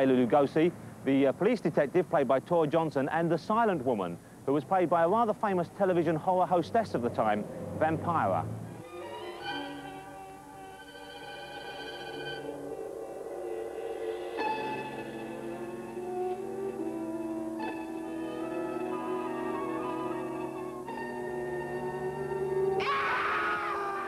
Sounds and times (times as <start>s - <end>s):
Speech: 0.0s - 8.5s
Music: 8.6s - 24.0s.